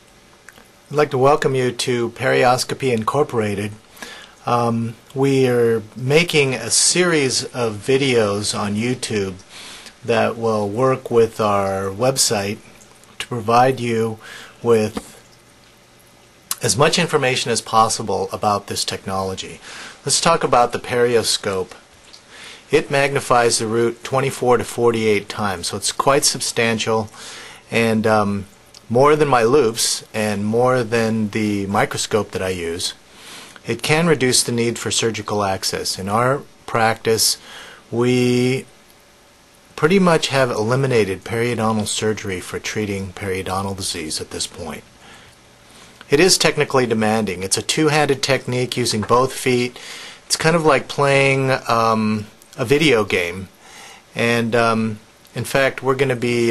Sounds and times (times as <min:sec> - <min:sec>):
Speech: 0:00.9 - 0:03.8, 0:04.4 - 0:15.2, 0:16.5 - 0:21.8, 0:22.7 - 0:33.0, 0:33.6 - 0:38.7, 0:39.8 - 0:44.9, 0:46.1 - 0:56.5.